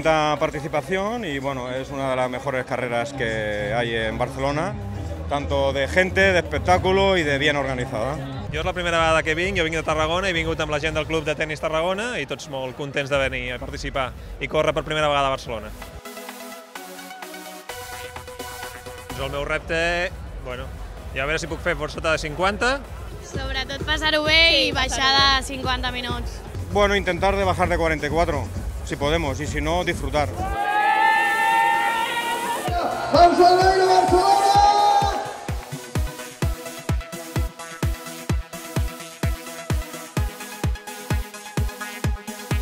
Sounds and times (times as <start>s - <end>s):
Music: 0.0s - 42.6s.